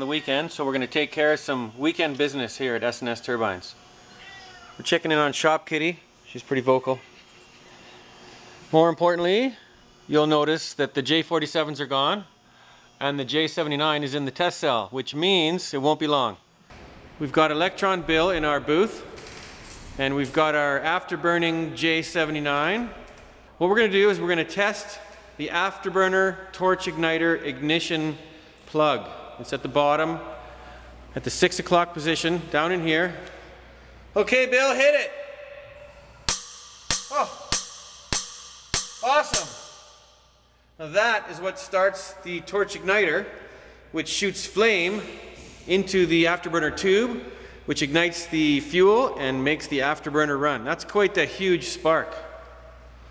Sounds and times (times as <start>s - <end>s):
Speech: 0.0s - 3.8s, 4.8s - 7.1s, 8.7s - 12.3s, 13.0s - 16.4s, 17.2s - 19.0s, 20.0s - 22.9s, 23.6s - 30.3s, 31.2s - 33.2s, 34.2s - 35.1s, 39.0s - 39.6s, 40.8s - 43.3s, 44.0s - 45.1s, 45.7s - 52.2s.